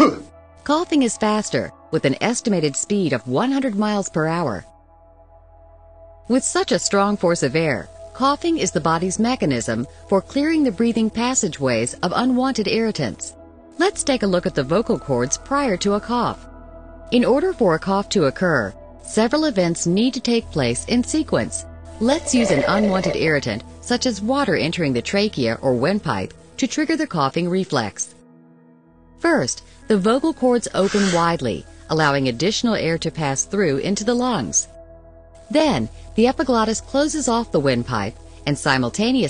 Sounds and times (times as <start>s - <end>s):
Speech: 0.0s - 4.7s, 6.3s - 16.4s, 17.2s - 28.2s, 29.2s - 34.7s, 35.5s - 39.2s
Music: 0.0s - 39.2s.